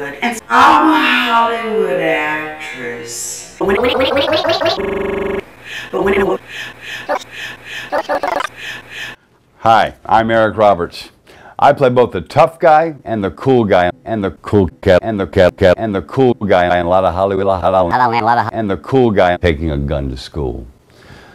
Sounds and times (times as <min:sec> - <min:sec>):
Speech: 0:00.0 - 0:03.6, 0:09.6 - 0:20.7.